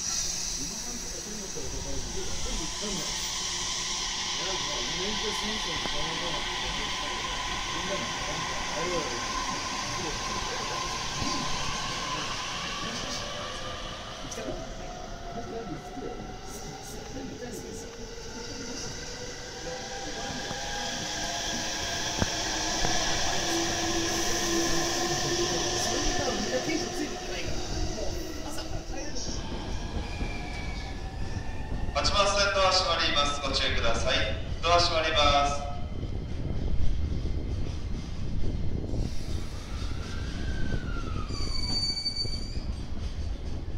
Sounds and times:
Train: 0:00.0 - 0:43.7
Speech: 0:00.6 - 0:03.2, 0:04.4 - 0:13.7, 0:25.1 - 0:29.5, 0:32.0 - 0:35.8.

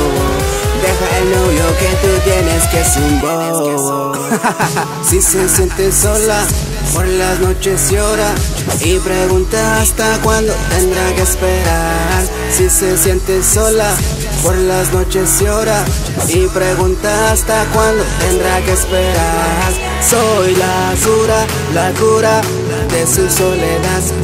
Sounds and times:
Electronic music: 0:00.0 - 0:24.2.

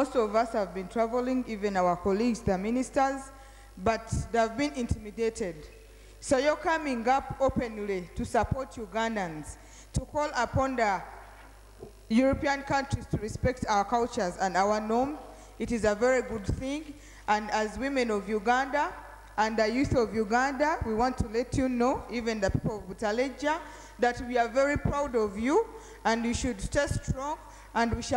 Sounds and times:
Female speech, woman speaking: 0:00.0 - 0:11.1, 0:12.1 - 0:28.1
Narration, monologue: 0:00.0 - 0:28.1.

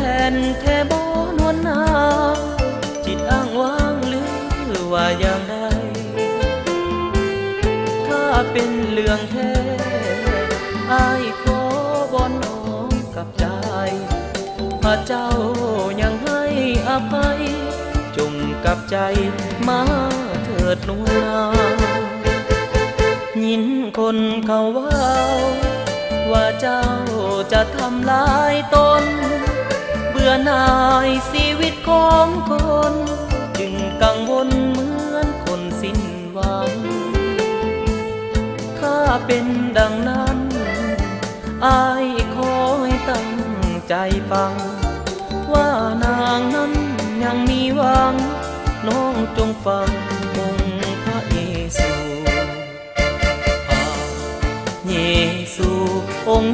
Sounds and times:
Country: 0:00.0 - 0:56.5.

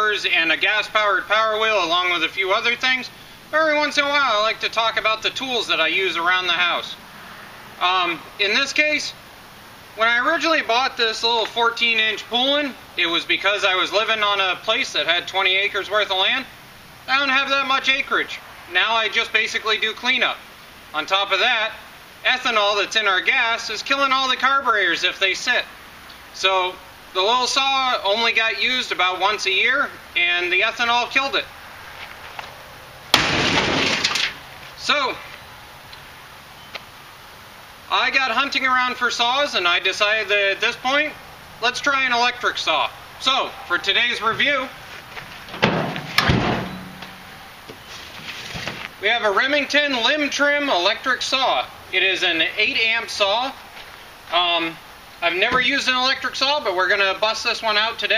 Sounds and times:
Speech: 0:00.0 - 0:07.0, 0:07.8 - 0:09.2, 0:10.0 - 0:16.5, 0:17.1 - 0:25.7, 0:26.4 - 0:31.5, 0:34.8 - 0:35.3, 0:37.9 - 0:44.8, 0:49.0 - 0:53.6, 0:54.3 - 0:58.1.

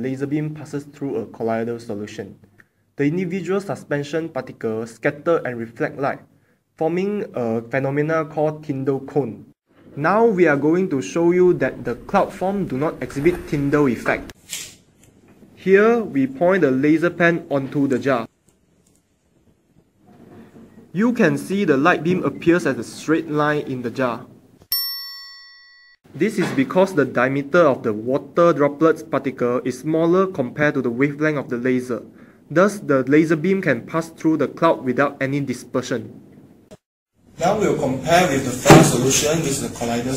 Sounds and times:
Speech: 0:00.0 - 0:02.4, 0:03.0 - 0:14.4, 0:15.6 - 0:18.3, 0:20.9 - 0:24.4, 0:26.2 - 0:36.2, 0:37.4 - 0:40.1
Inside, small room: 0:00.0 - 0:40.1.

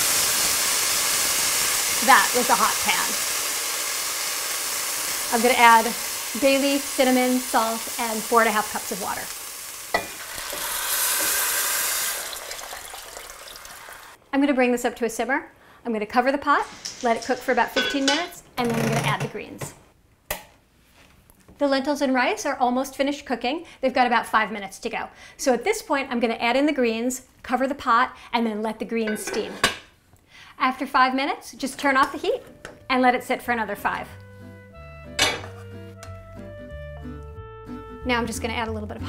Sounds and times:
Frying (food): 0:00.0 - 0:14.2, 0:16.5 - 0:18.3
Sizzle: 0:00.0 - 0:14.2, 0:16.5 - 0:18.4.

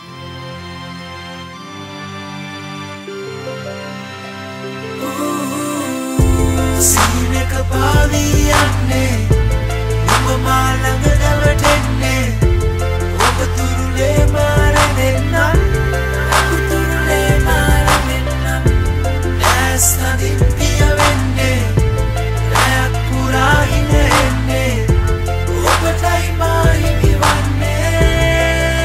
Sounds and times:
Tender music: 0:00.0 - 0:28.8.

